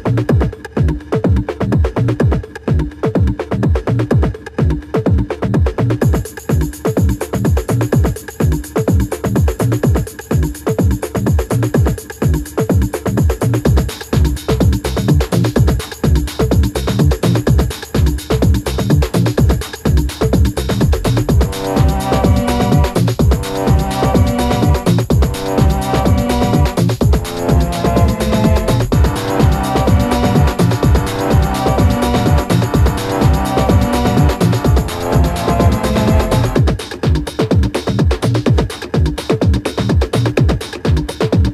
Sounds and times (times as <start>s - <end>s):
House music: 5.9s - 41.5s.